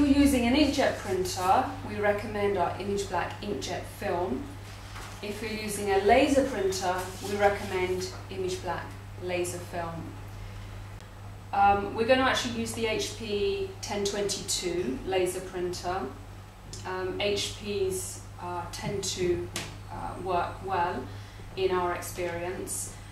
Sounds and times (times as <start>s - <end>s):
Speech: 0.0s - 4.5s, 5.2s - 10.1s, 11.6s - 16.2s, 16.8s - 23.0s.